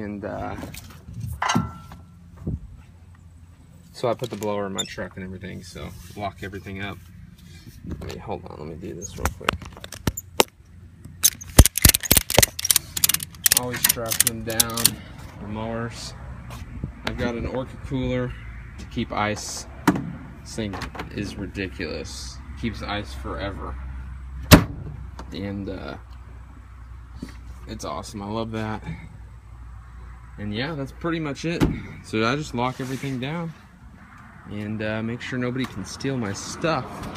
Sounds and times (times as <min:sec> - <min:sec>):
Speech: 0:00.0 - 0:00.8, 0:03.9 - 0:07.0, 0:07.9 - 0:09.6, 0:13.5 - 0:16.2, 0:17.0 - 0:19.7, 0:20.5 - 0:23.8, 0:25.3 - 0:26.1, 0:27.7 - 0:29.1, 0:30.4 - 0:33.6, 0:34.5 - 0:36.9.